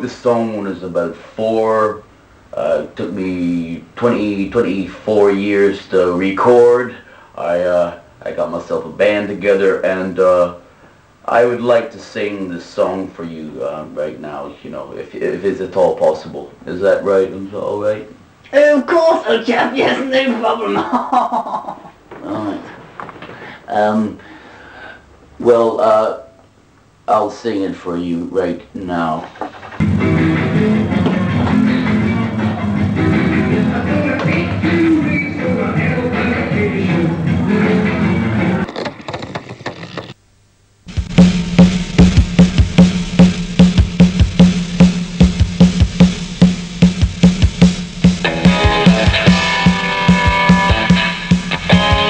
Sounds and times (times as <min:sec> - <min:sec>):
Speech: 0:00.0 - 0:10.6, 0:11.2 - 0:21.1, 0:22.2 - 0:22.8, 0:23.7 - 0:24.2, 0:25.4 - 0:26.4, 0:27.1 - 0:29.3.